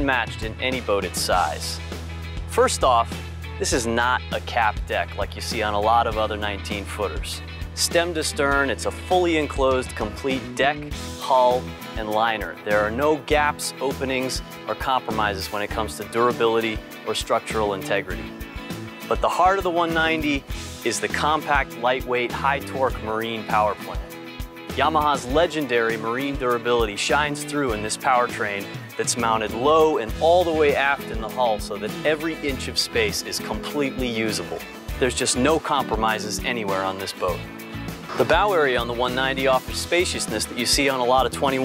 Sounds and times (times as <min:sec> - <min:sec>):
Speech: 0:00.0 - 0:01.8, 0:02.5 - 0:18.3, 0:19.1 - 0:24.1, 0:24.7 - 0:37.4, 0:38.1 - 0:41.6
Music: 0:00.0 - 0:41.6.